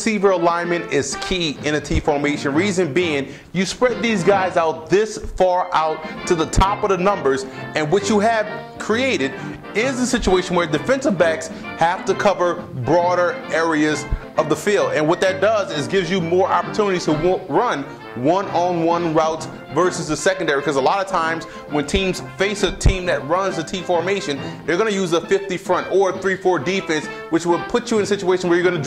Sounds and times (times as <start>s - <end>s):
Music: 0.0s - 28.8s
Speech: 0.0s - 28.8s.